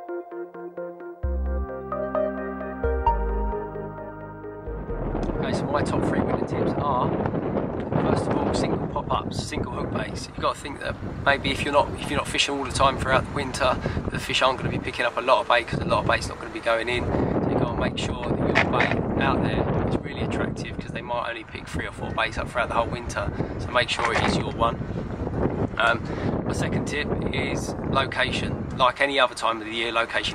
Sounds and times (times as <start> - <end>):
Speech: 5.4 - 7.2, 7.9 - 24.8, 25.8 - 30.3.